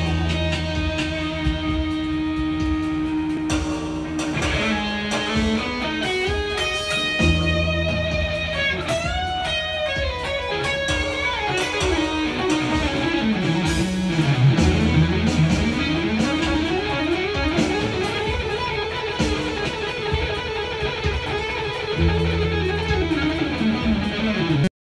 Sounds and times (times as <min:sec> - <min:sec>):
Guitar: 0:00.0 - 0:24.7.